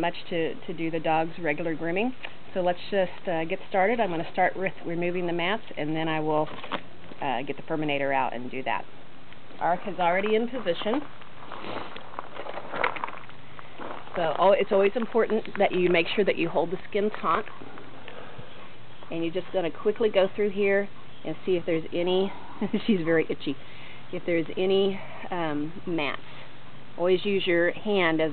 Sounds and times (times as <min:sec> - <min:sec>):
Speech: 0:00.0 - 0:06.6, 0:07.2 - 0:08.9, 0:09.6 - 0:11.1, 0:14.2 - 0:17.5, 0:19.1 - 0:23.6, 0:24.2 - 0:26.2, 0:27.0 - 0:28.3.